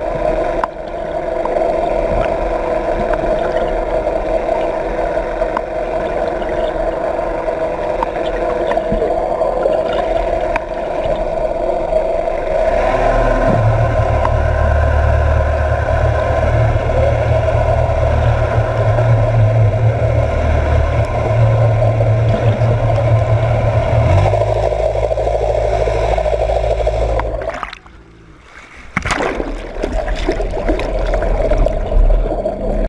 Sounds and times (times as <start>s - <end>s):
Propeller, airscrew: 12.6s - 27.3s.